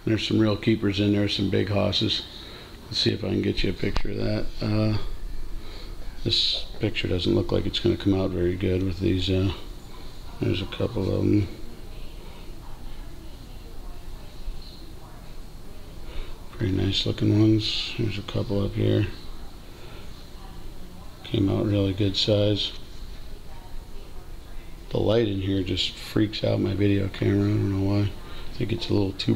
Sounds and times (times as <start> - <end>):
Speech: 0.0 - 5.1, 6.0 - 29.3.